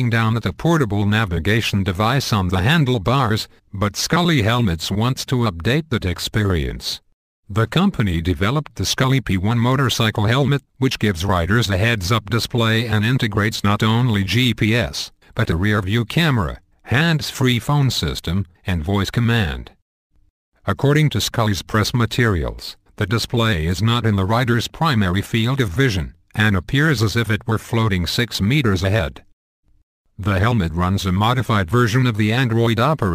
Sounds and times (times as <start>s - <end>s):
Speech: 0.0s - 19.8s, 20.7s - 29.3s, 30.2s - 33.1s.